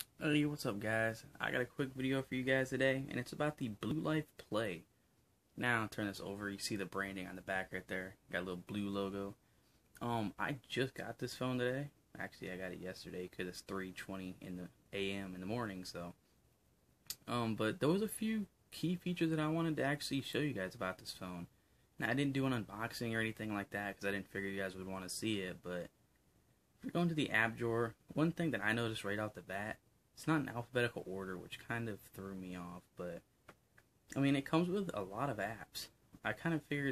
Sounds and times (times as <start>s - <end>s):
Speech: 0.0s - 4.9s, 5.6s - 9.4s, 10.0s - 16.2s, 17.1s - 25.9s, 26.8s - 33.3s, 34.1s - 36.9s
Inside, small room: 0.0s - 36.9s.